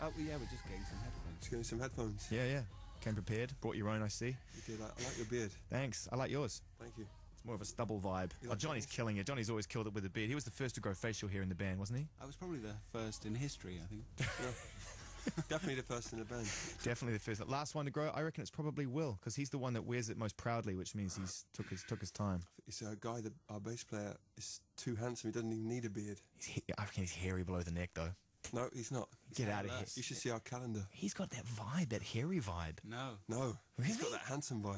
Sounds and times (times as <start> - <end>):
Speech: 0.0 - 14.8, 15.4 - 34.7
Radio: 4.6 - 5.4, 21.1 - 22.3.